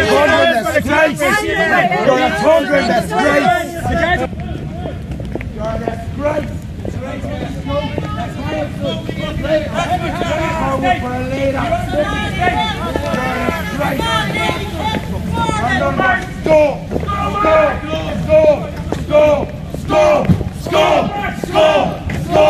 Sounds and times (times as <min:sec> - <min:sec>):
Speech: 0:00.0 - 0:05.0, 0:05.6 - 0:22.5.